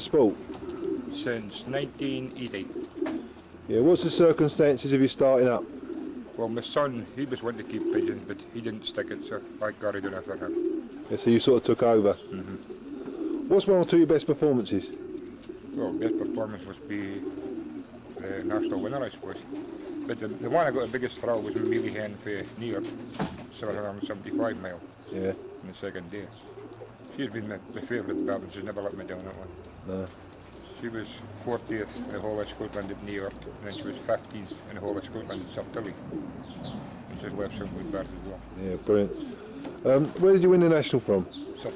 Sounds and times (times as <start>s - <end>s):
Coo: 0.0s - 41.7s.